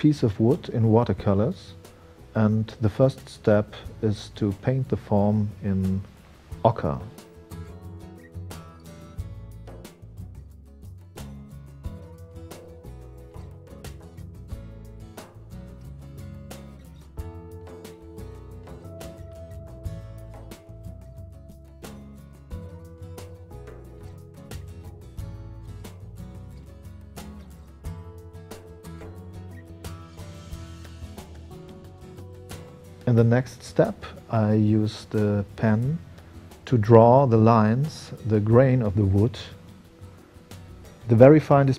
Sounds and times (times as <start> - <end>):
Music: 0.0 - 41.7.